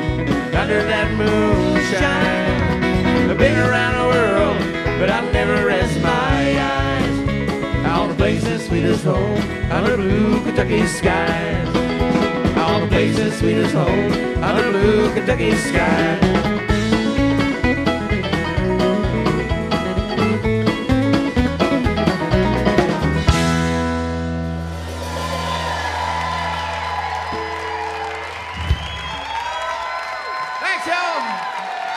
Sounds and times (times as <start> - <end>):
Country: 0.0 - 31.0
Singing: 3.3 - 7.2, 7.8 - 11.8, 12.6 - 16.4.